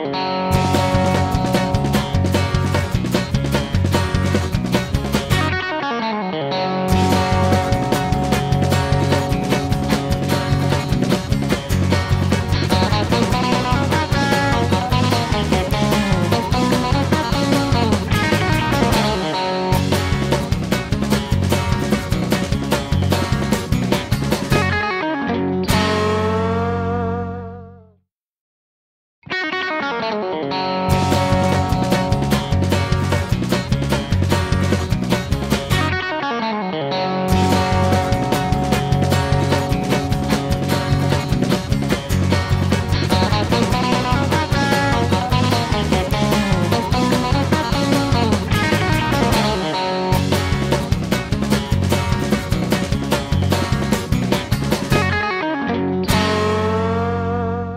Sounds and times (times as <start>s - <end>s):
Music: 0.0s - 28.1s, 29.2s - 57.7s.